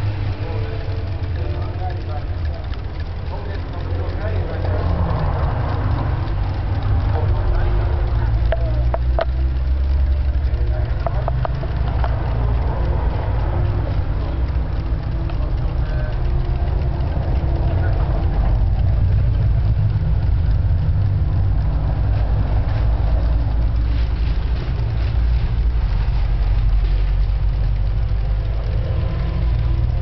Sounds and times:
Clock: 0.0s - 30.0s
Speech: 0.3s - 19.6s.

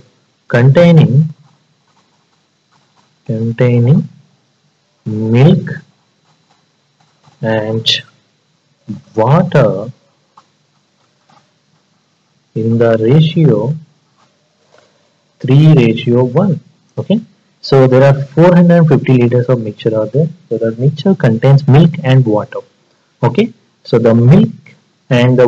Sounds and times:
Speech: 0.5s - 1.4s, 3.3s - 4.1s, 5.1s - 5.9s, 7.4s - 8.1s, 8.9s - 10.0s, 12.6s - 13.8s, 15.4s - 25.4s.

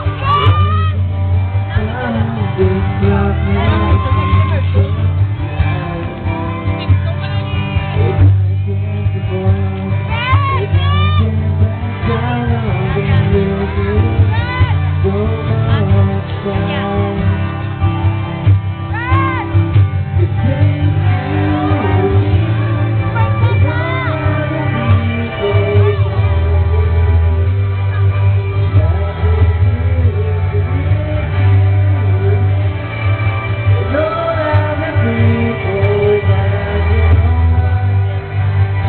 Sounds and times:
Male singing: 0.0s - 1.0s, 1.6s - 17.7s, 18.9s - 27.5s, 28.5s - 38.8s
Music: 0.0s - 38.8s.

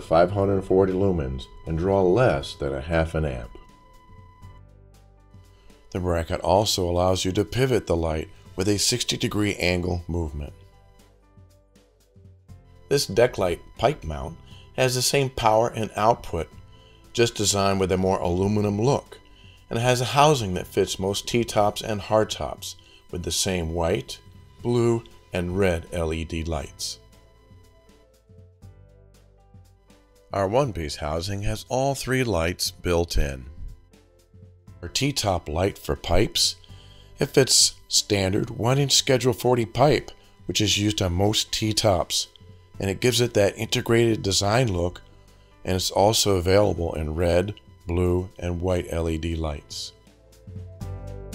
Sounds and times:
Speech: 0.0s - 3.6s, 5.9s - 10.6s, 12.9s - 16.5s, 17.2s - 27.0s, 30.3s - 33.6s, 34.8s - 36.6s, 37.2s - 45.0s, 45.7s - 50.0s
Music: 0.0s - 51.3s.

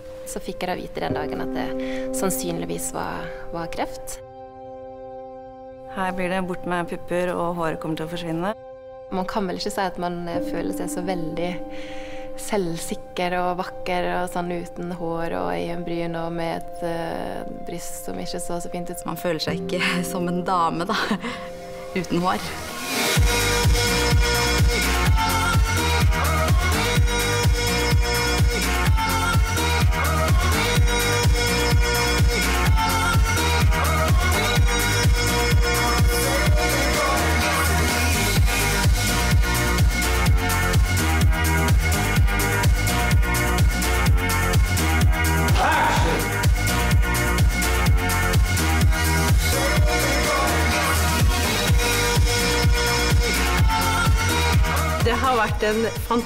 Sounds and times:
Music: 0.0s - 56.2s
Speech: 0.3s - 4.2s, 5.9s - 11.6s, 12.4s - 21.2s, 22.0s - 22.6s, 45.5s - 46.3s, 55.0s - 56.2s.

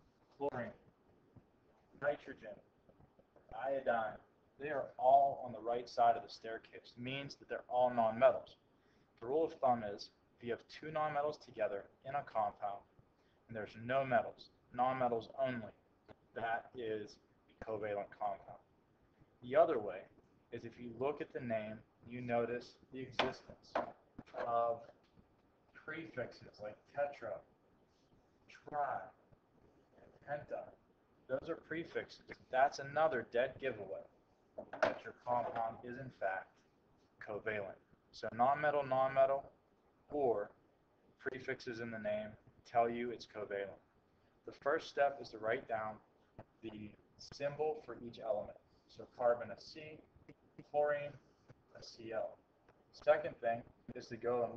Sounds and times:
Speech: 0.4s - 0.8s, 2.0s - 2.7s, 3.5s - 8.6s, 9.2s - 12.9s, 13.5s - 18.7s, 19.4s - 25.0s, 25.7s - 27.5s, 28.5s - 29.2s, 30.0s - 34.1s, 34.8s - 36.6s, 37.2s - 39.5s, 40.1s - 40.6s, 41.2s - 43.8s, 44.5s - 54.5s.

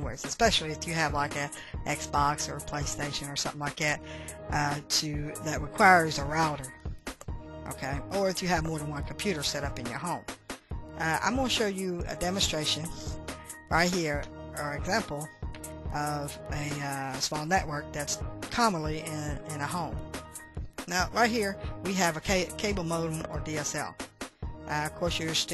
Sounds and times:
Speech: 0.0s - 6.7s, 7.7s - 10.2s, 11.0s - 15.3s, 16.0s - 20.0s, 20.9s - 24.0s, 24.7s - 25.5s
Music: 0.0s - 25.5s.

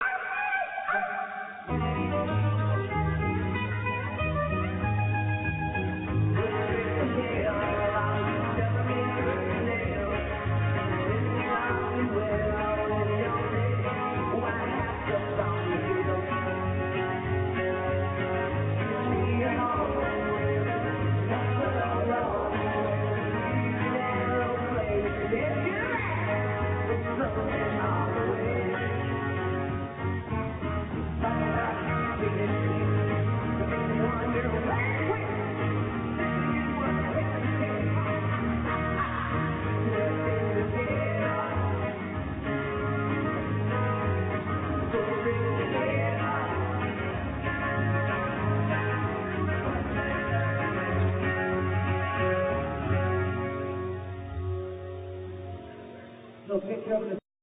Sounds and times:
Music: 0.0s - 57.2s.

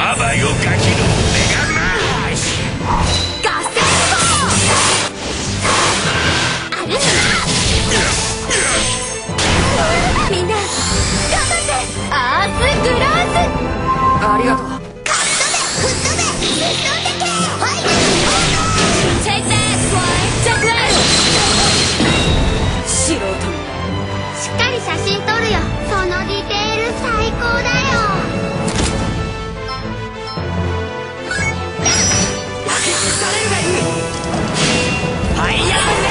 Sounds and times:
Music: 0.0s - 36.1s.

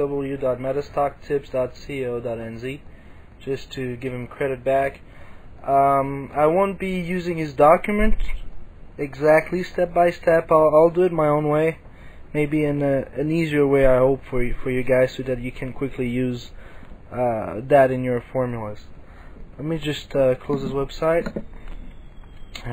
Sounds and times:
Speech: 0.0s - 2.8s, 3.4s - 5.0s, 5.6s - 18.9s, 19.6s - 21.4s.

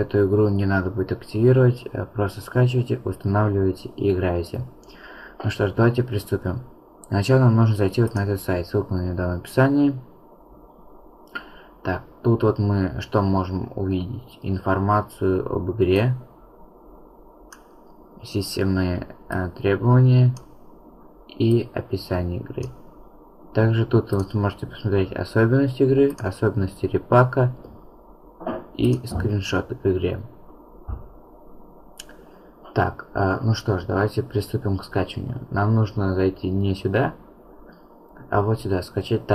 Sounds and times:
Speech: 0.0s - 4.8s, 5.4s - 10.1s, 11.8s - 16.3s, 18.2s - 20.4s, 21.3s - 22.8s, 23.5s - 27.7s, 28.4s - 30.4s, 32.7s - 37.2s, 38.2s - 39.3s.

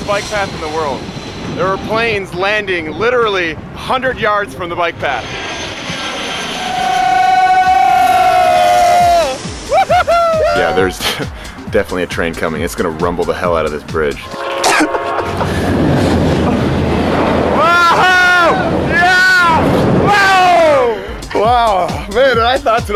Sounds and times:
Speech: 0.0s - 1.0s, 1.6s - 5.3s, 10.6s - 14.3s, 21.3s - 22.9s
Fixed-wing aircraft, airplane: 5.0s - 6.8s
Music: 7.8s - 16.9s, 20.1s - 22.9s.

